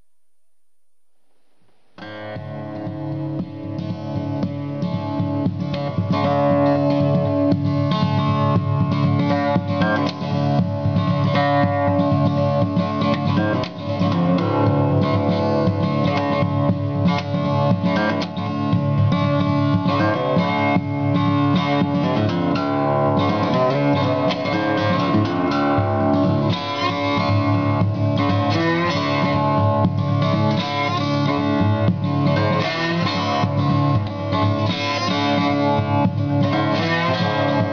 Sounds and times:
Guitar: 0.0s - 37.7s
Blues: 1.4s - 37.7s.

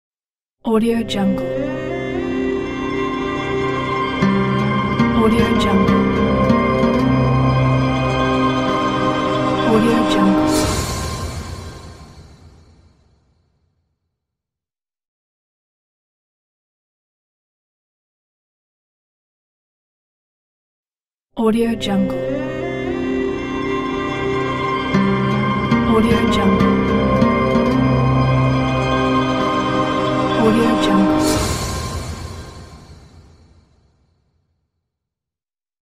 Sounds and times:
Speech: 0.7s - 1.7s, 5.1s - 6.0s, 9.6s - 10.6s, 21.4s - 22.5s, 25.8s - 26.8s, 30.3s - 31.4s
Music: 0.7s - 13.5s, 21.4s - 34.3s.

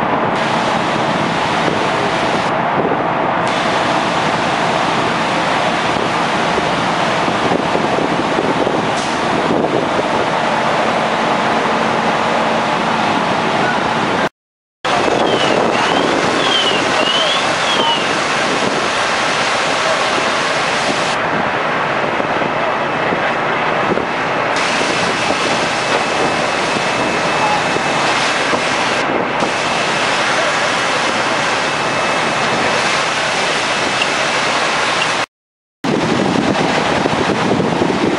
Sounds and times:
Speech: 16.4s - 18.4s, 19.7s - 20.4s, 22.4s - 23.9s, 27.2s - 28.1s, 30.2s - 31.6s.

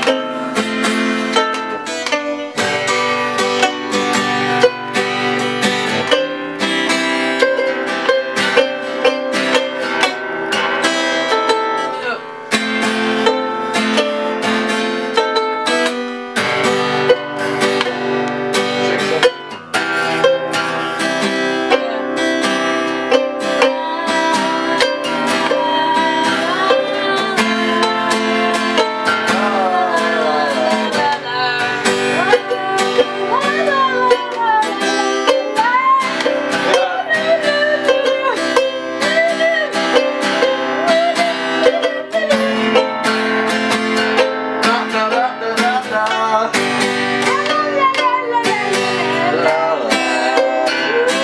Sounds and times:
Acoustic guitar: 0.0s - 51.2s
Strum: 0.0s - 51.2s
Speech: 11.9s - 12.3s, 47.3s - 50.0s.

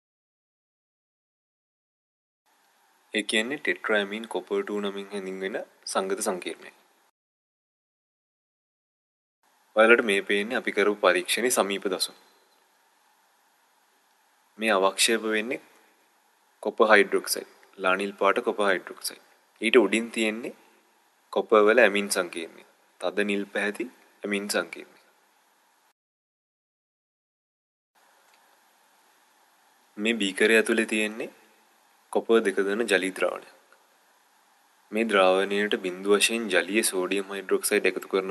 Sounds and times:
Speech: 3.2s - 6.8s, 9.8s - 12.2s, 14.6s - 15.7s, 16.6s - 20.6s, 21.3s - 25.0s, 30.0s - 31.4s, 32.1s - 33.6s, 34.9s - 38.3s.

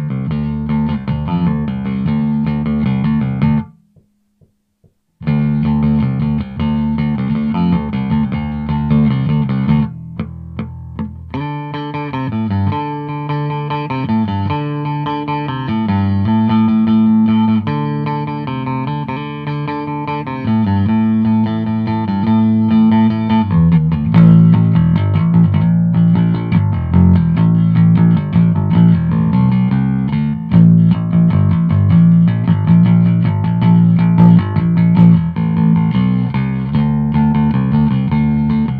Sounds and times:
Bass guitar: 0.0s - 38.7s.

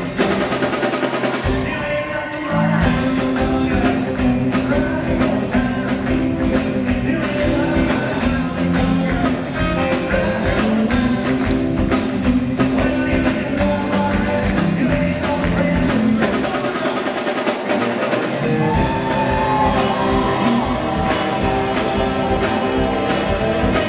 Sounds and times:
Music: 0.0s - 23.8s
Male singing: 1.4s - 17.3s.

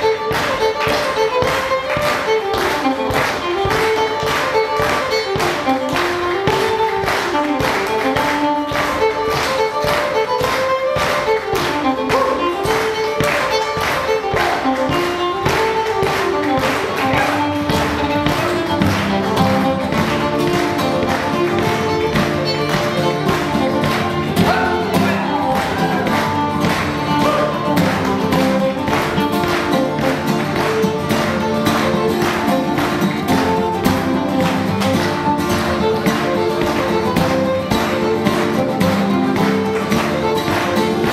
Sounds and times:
Violin, fiddle: 0.0s - 41.1s.

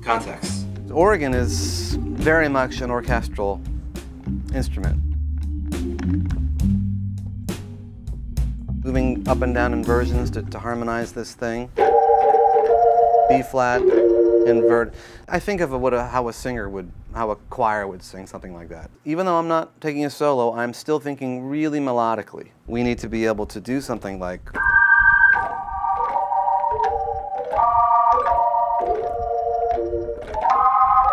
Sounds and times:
Speech: 0.0s - 3.6s, 4.5s - 5.0s, 8.8s - 11.7s, 13.3s - 24.6s
Organ: 0.4s - 3.6s, 24.6s - 31.1s
Piano: 11.7s - 14.9s, 24.6s - 31.1s.

